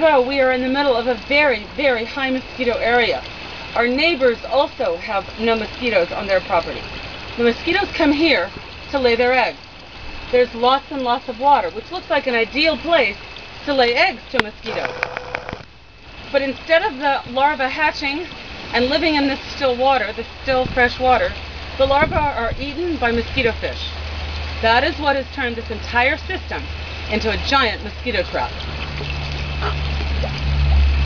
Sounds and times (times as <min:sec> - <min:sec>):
Speech: 0:00.0 - 0:03.2, 0:03.8 - 0:06.8, 0:07.4 - 0:09.6, 0:10.3 - 0:14.9, 0:16.4 - 0:24.0, 0:24.6 - 0:28.5
Trickle, dribble: 0:00.0 - 0:14.7, 0:15.7 - 0:31.0.